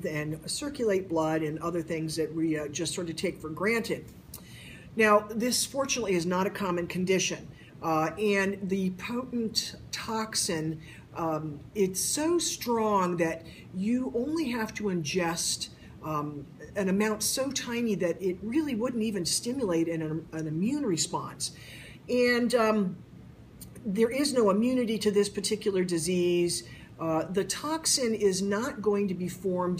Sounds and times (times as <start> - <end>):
Speech: 0.0 - 4.1, 5.0 - 23.0, 23.6 - 29.7.